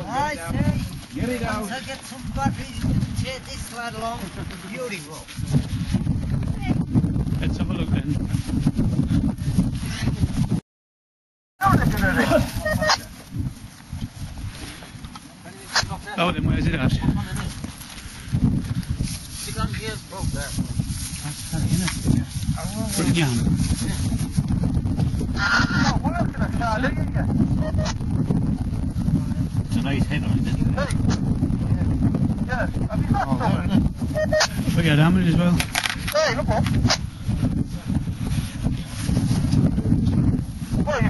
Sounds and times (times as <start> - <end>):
Outside, rural or natural: 0.0 - 10.6, 11.6 - 41.1.